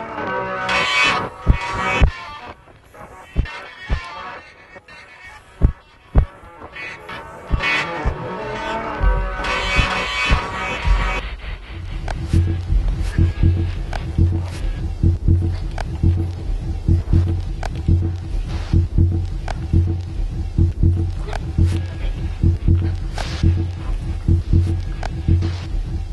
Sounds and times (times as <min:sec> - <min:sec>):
Music: 0:00.0 - 0:26.1.